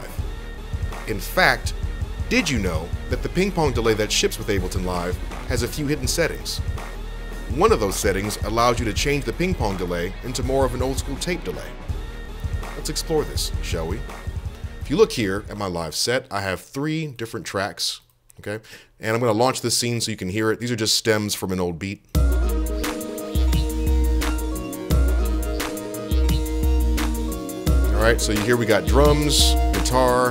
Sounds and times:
Music: 0.0s - 15.9s, 22.1s - 30.3s
Speech: 1.1s - 1.7s, 2.3s - 6.6s, 7.5s - 11.7s, 12.8s - 14.1s, 14.8s - 22.1s, 27.9s - 30.3s.

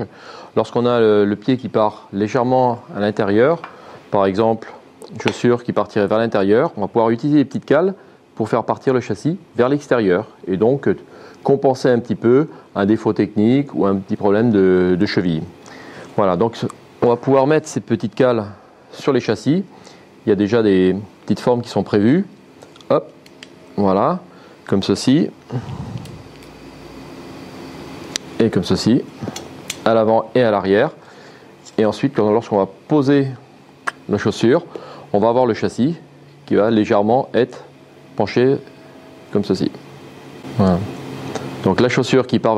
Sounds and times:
Speech: 0.0s - 15.6s, 16.2s - 23.2s, 23.8s - 25.4s, 28.4s - 31.0s, 31.6s - 38.7s, 39.3s - 39.9s, 40.5s - 41.0s, 41.6s - 42.5s.

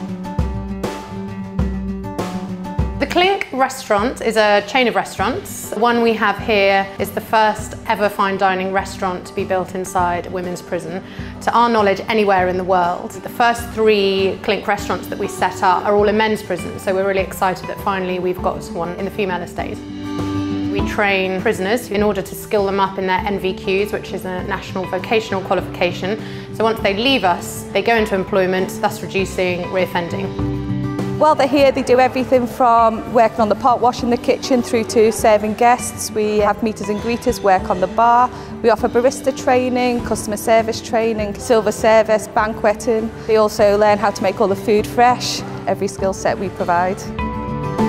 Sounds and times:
Music: 0.0s - 47.8s
Speech: 3.0s - 19.8s, 20.8s - 30.3s, 31.2s - 47.1s.

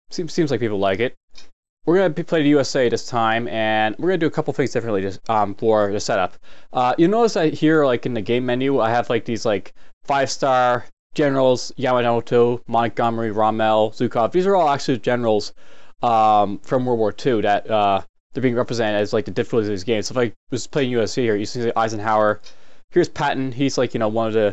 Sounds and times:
Speech: 0.1s - 1.2s, 1.9s - 24.5s.

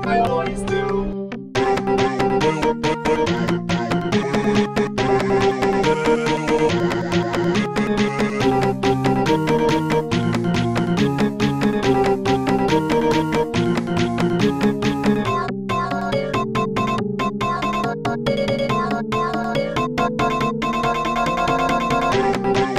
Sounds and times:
Music: 0.0s - 22.7s.

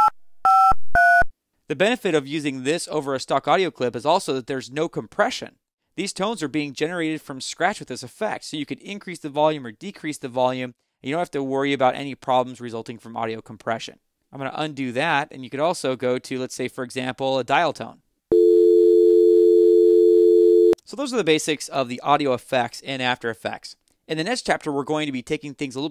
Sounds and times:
Speech: 1.7s - 18.0s, 20.9s - 25.9s
Dial tone: 18.3s - 20.8s.

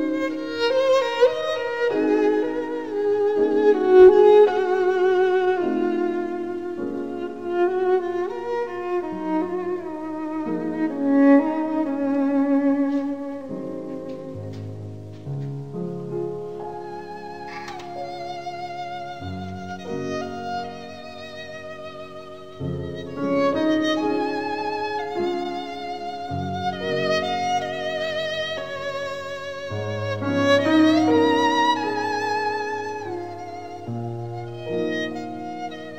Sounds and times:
Violin, fiddle: 0.0s - 35.9s.

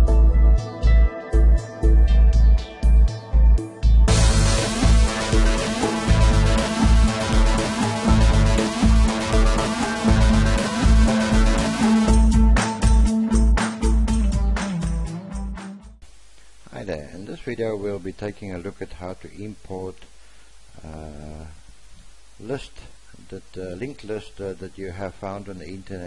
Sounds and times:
Music: 0.0s - 16.0s
Speech: 16.7s - 20.1s, 20.8s - 21.6s, 22.4s - 26.0s.

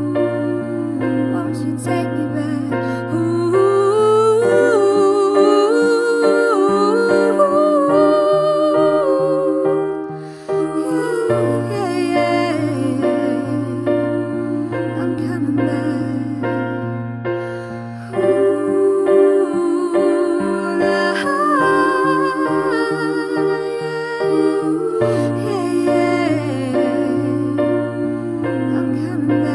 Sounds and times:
Singing: 0.0s - 17.0s, 18.0s - 29.5s
Tender music: 0.0s - 29.5s.

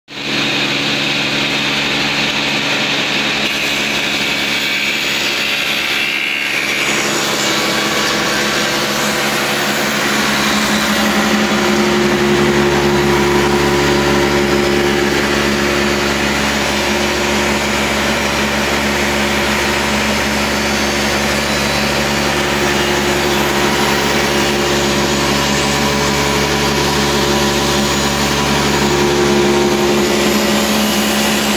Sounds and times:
Power tool: 0.1s - 31.5s.

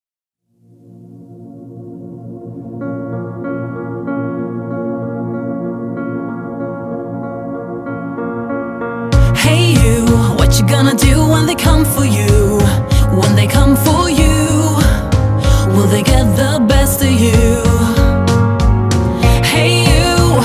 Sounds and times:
Ambient music: 0.5s - 20.4s.

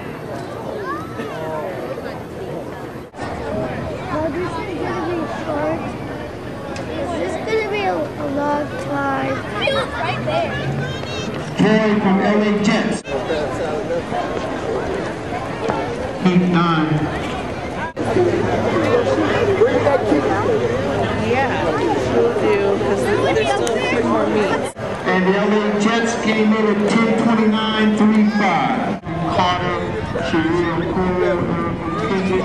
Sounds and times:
Outside, urban or manmade: 0.0s - 32.4s
Run: 10.8s - 11.6s, 13.4s - 16.2s.

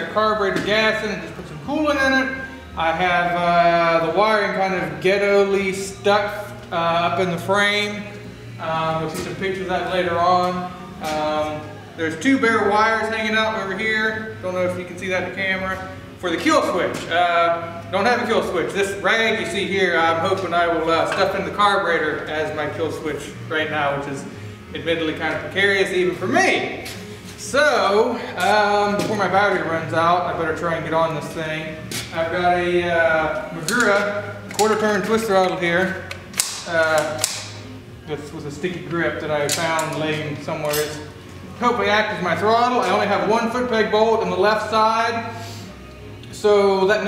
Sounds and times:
Speech: 0.0s - 26.8s, 27.4s - 36.0s, 36.7s - 37.2s, 38.1s - 45.3s, 46.3s - 47.0s.

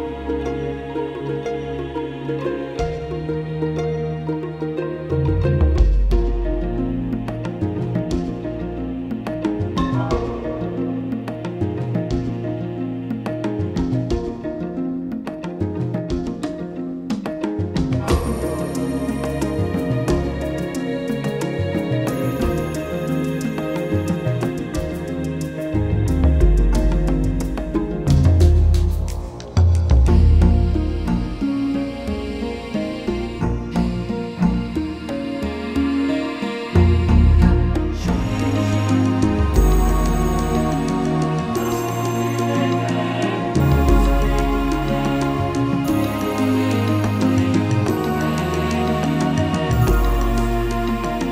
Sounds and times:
Music: 0.0s - 51.3s.

